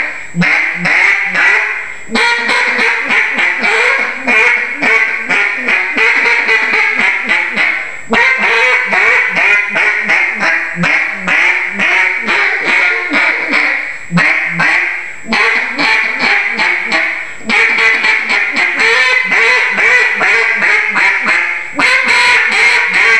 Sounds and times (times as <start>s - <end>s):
Quack: 0.0s - 23.1s.